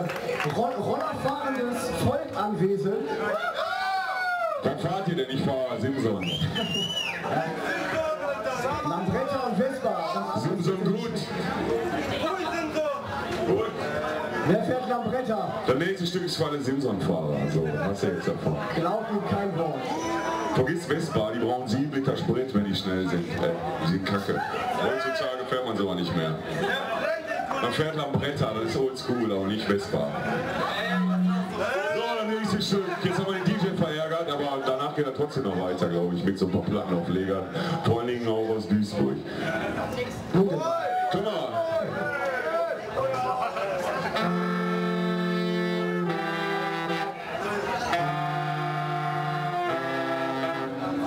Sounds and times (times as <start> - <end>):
Speech: 0.0 - 3.2, 4.6 - 6.5, 12.0 - 20.0, 20.6 - 30.4, 31.4 - 39.3.